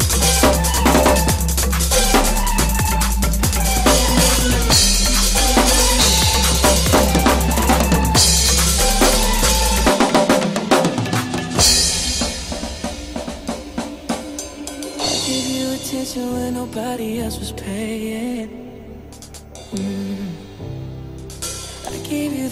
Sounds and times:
Drum roll: 0:00.0 - 0:16.9
Drum kit: 0:00.0 - 0:17.1, 0:19.1 - 0:22.5
Cymbal: 0:00.0 - 0:17.4, 0:19.1 - 0:22.5.

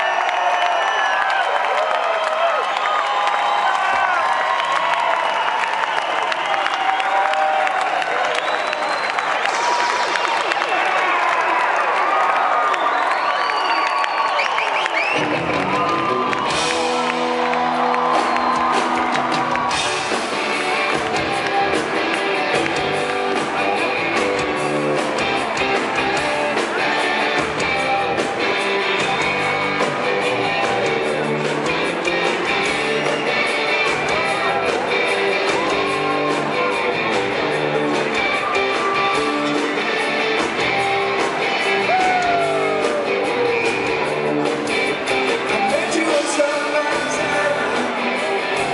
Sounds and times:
Music: 0:00.0 - 0:48.7.

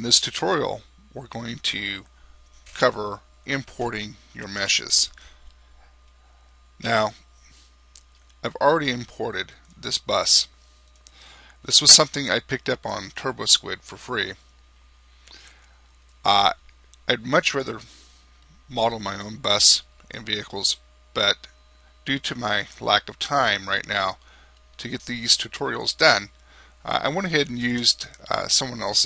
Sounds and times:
Speech: 0:00.0 - 0:02.1, 0:02.8 - 0:05.2, 0:06.8 - 0:07.2, 0:08.4 - 0:10.5, 0:11.6 - 0:14.4, 0:16.3 - 0:17.9, 0:18.7 - 0:24.2, 0:24.8 - 0:29.0.

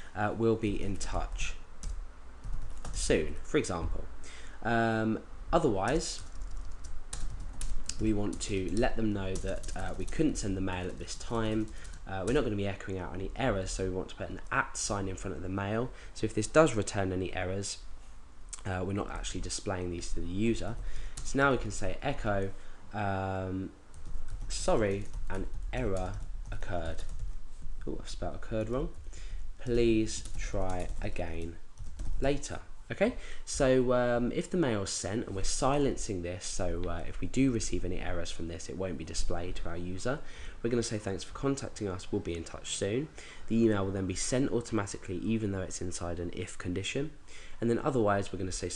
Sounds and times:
Typing: 0:06.2 - 0:10.2.

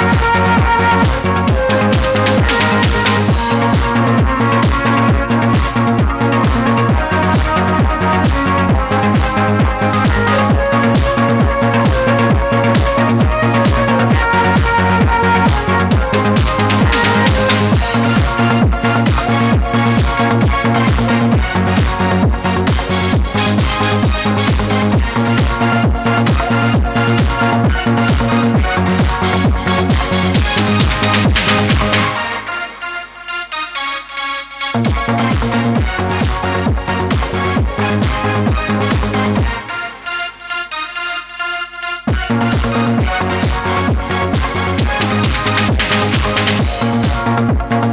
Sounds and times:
Synthesizer: 0:00.0 - 0:47.9
Techno: 0:00.0 - 0:47.9
Trance music: 0:00.0 - 0:47.9.

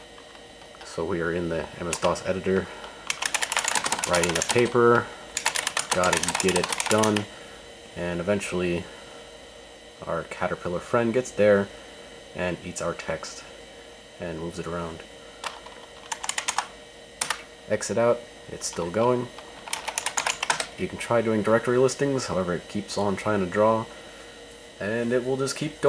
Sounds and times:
Speech: 0:00.8 - 0:02.7, 0:04.0 - 0:05.1, 0:05.9 - 0:07.3, 0:08.0 - 0:08.9, 0:10.0 - 0:11.7, 0:12.4 - 0:13.5, 0:14.2 - 0:15.1, 0:17.7 - 0:19.4, 0:20.8 - 0:23.9, 0:24.8 - 0:25.8
Computer keyboard: 0:01.9 - 0:02.2, 0:03.0 - 0:04.8, 0:05.4 - 0:07.3, 0:15.4 - 0:17.5, 0:19.6 - 0:20.7.

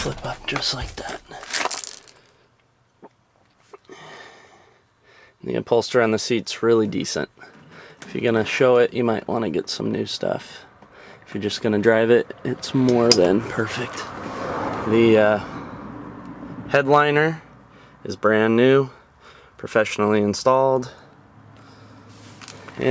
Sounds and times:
Speech: 0:00.0 - 0:01.5, 0:05.4 - 0:07.4, 0:08.1 - 0:10.7, 0:11.3 - 0:14.1, 0:14.9 - 0:15.5, 0:16.7 - 0:17.4, 0:18.0 - 0:19.0, 0:19.6 - 0:21.0.

